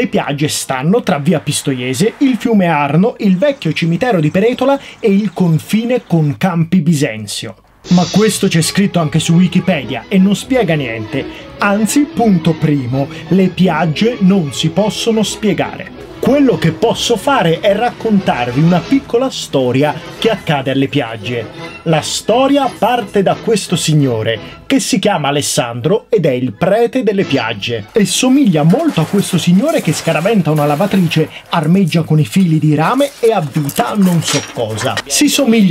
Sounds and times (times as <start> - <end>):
Music: 0.0 - 35.7
Speech: 0.0 - 35.7.